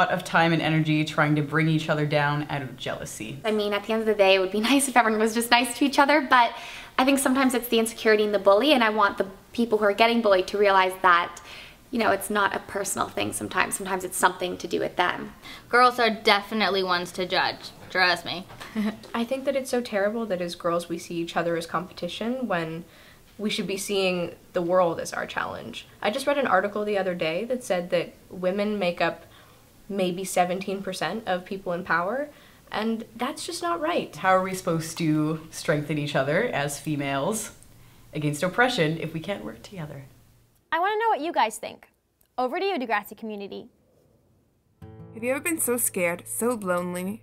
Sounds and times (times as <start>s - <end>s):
Female speech, woman speaking: 0.0s - 29.2s, 29.9s - 37.6s, 38.2s - 40.1s, 40.8s - 43.7s, 45.2s - 47.2s
Conversation: 0.0s - 47.2s.